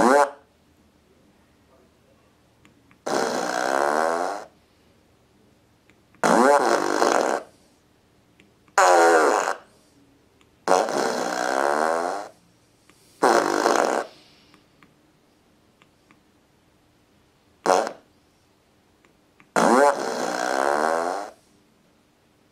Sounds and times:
Fart: 0.0s - 0.5s, 3.0s - 4.6s, 6.2s - 7.6s, 8.8s - 9.8s, 10.6s - 12.4s, 13.2s - 14.2s, 17.6s - 18.1s, 19.4s - 21.4s.

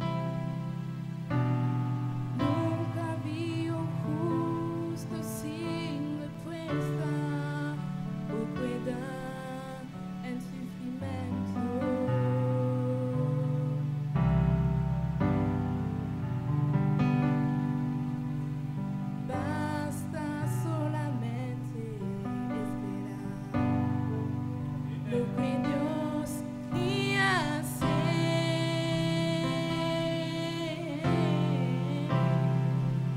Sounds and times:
Music: 0.0s - 33.1s.

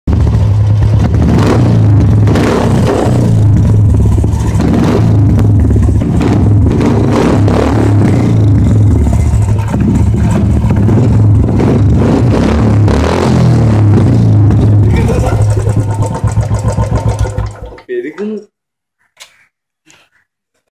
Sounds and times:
Speech: 17.8s - 18.5s.

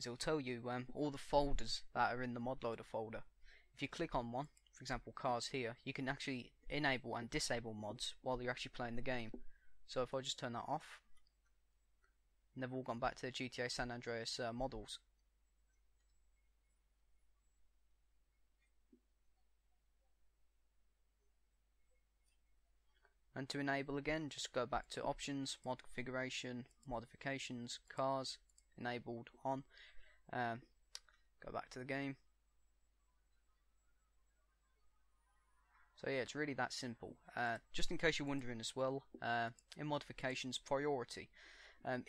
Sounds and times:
Speech: 0.0s - 11.0s, 12.6s - 15.1s, 23.4s - 29.7s, 30.3s - 30.7s, 31.4s - 32.2s, 36.0s - 42.0s.

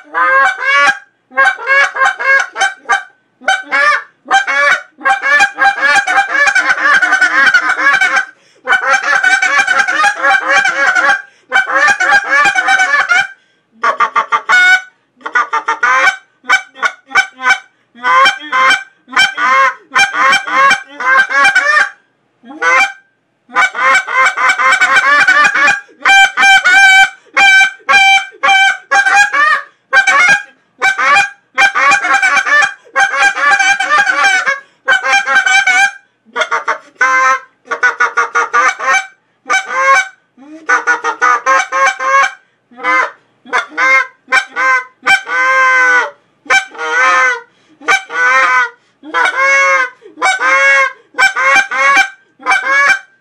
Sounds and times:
Honk: 0.0s - 22.0s, 23.6s - 53.2s.

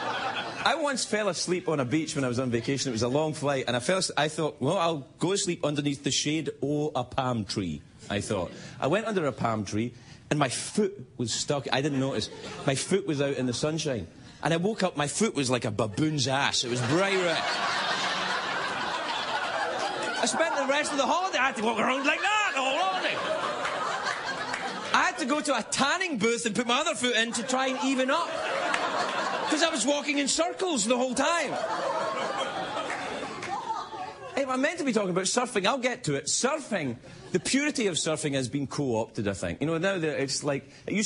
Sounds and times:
Narration, monologue: 0.0s - 41.0s.

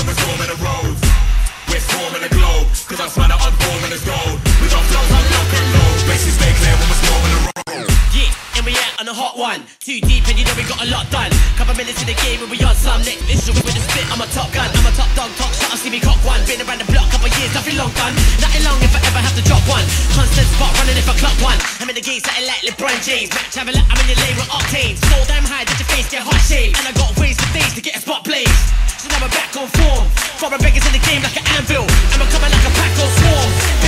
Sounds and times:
Dubstep: 0.0s - 9.4s, 10.0s - 33.8s.

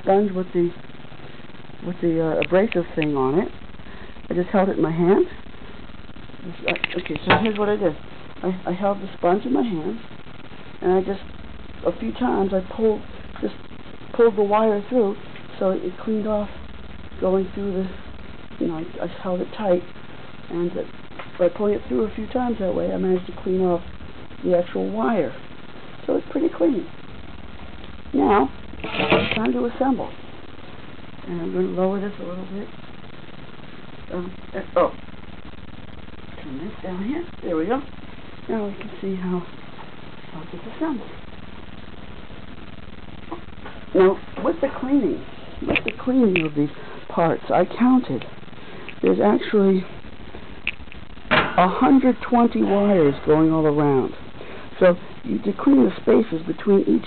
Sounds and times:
Speech: 0.0s - 0.8s, 1.8s - 3.6s, 4.3s - 5.4s, 6.4s - 10.0s, 10.8s - 11.2s, 11.8s - 13.6s, 14.2s - 16.6s, 17.2s - 18.0s, 18.6s - 19.9s, 20.5s - 25.4s, 26.1s - 26.9s, 28.1s - 30.2s, 31.2s - 32.7s, 34.1s - 35.0s, 36.4s - 37.9s, 38.5s - 39.6s, 40.3s - 41.1s, 43.3s - 48.3s, 49.0s - 49.9s, 51.4s - 54.2s, 54.8s - 57.0s.

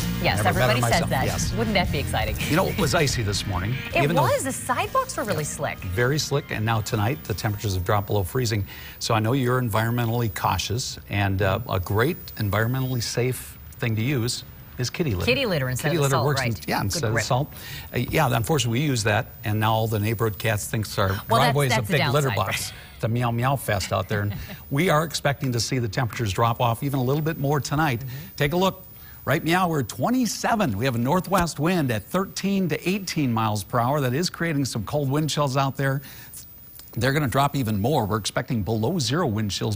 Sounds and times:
Speech: 0.2s - 3.4s, 5.3s - 36.0s.

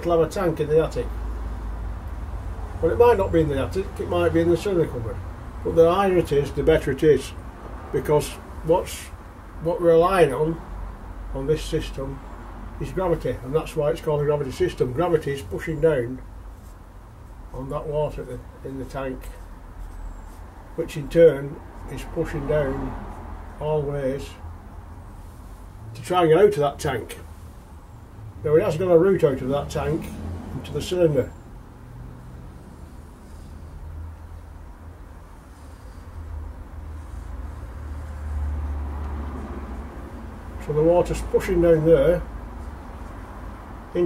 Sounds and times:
Speech: 0.0s - 1.1s, 2.8s - 10.6s, 11.3s - 12.2s, 12.8s - 16.2s, 17.5s - 19.4s, 20.8s - 23.0s, 23.6s - 24.4s, 26.0s - 27.3s, 28.4s - 31.4s, 40.6s - 42.3s.

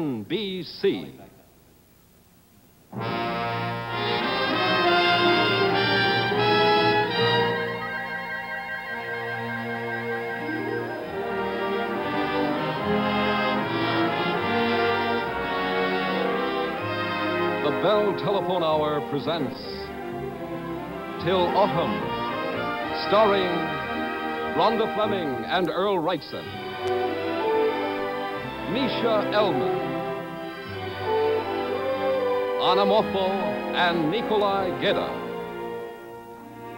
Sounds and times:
Speech: 0.0s - 1.4s, 17.6s - 19.8s, 21.2s - 22.0s, 23.0s - 23.7s, 24.6s - 26.5s, 28.7s - 29.8s, 32.6s - 35.2s
Music: 2.9s - 36.7s.

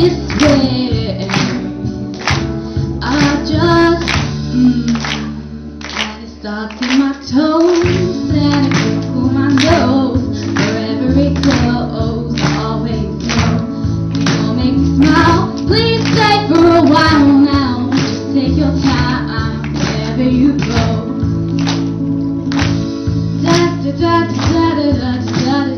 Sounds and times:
Vocal music: 0.0s - 25.7s.

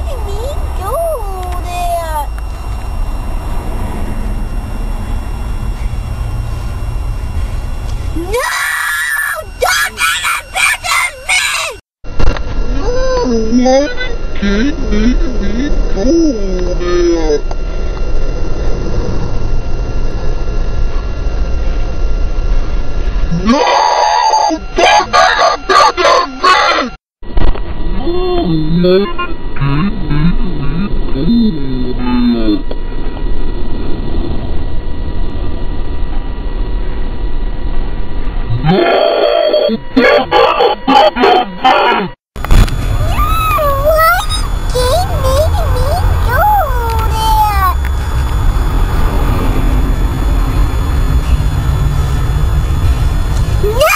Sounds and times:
Child speech, kid speaking: 0.0s - 2.3s, 9.3s - 11.8s, 12.7s - 14.7s, 43.0s - 47.8s, 53.6s - 53.9s.

